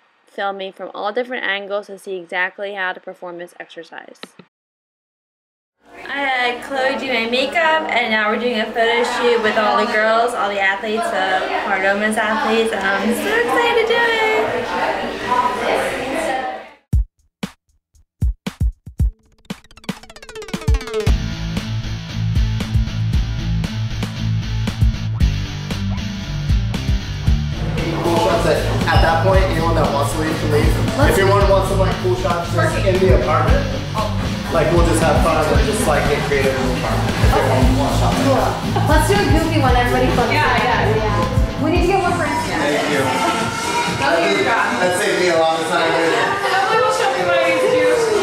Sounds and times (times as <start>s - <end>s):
Drum machine: 17.0s - 42.5s.